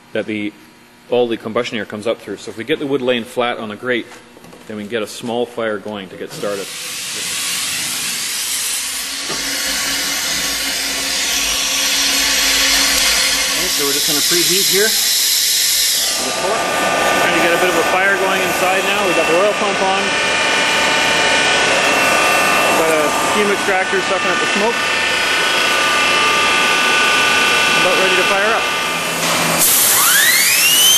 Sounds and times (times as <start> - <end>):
Speech: 0.1 - 6.7, 13.6 - 15.0, 16.2 - 16.6, 17.2 - 20.1, 22.8 - 24.8, 27.8 - 28.7.